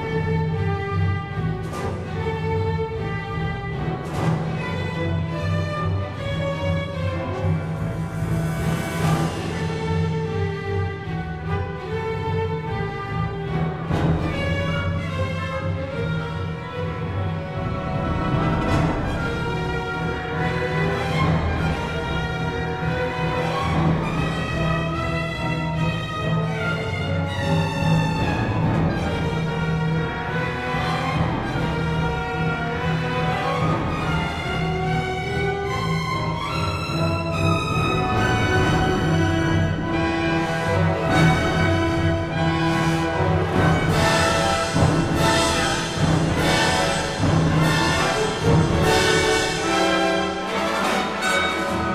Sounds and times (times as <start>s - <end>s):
Exciting music: 0.0s - 51.9s
Theme music: 0.0s - 51.9s.